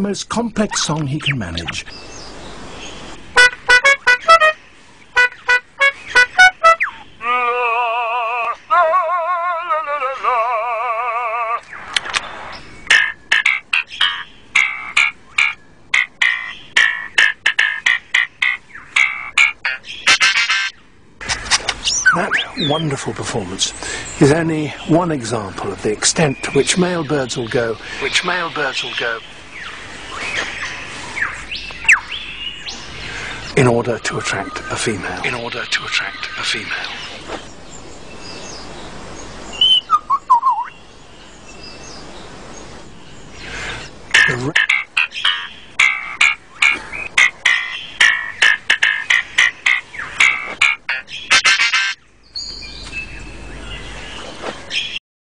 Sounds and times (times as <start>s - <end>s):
Bird: 4.1s - 37.5s, 38.2s - 55.0s.